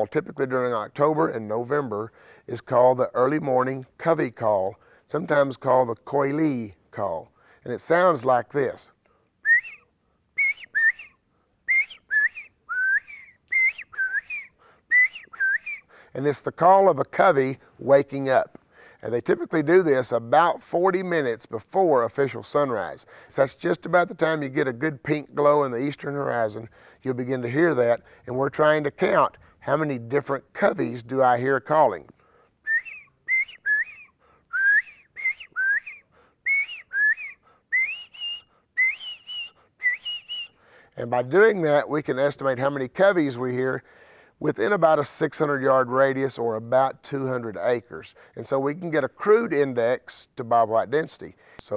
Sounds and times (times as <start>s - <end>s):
Speech: 0.0s - 9.0s, 16.2s - 32.1s, 41.0s - 43.8s, 44.4s - 51.7s
Whistling: 9.4s - 16.0s, 32.6s - 40.8s
Outside, rural or natural: 9.4s - 16.9s, 25.4s - 45.0s.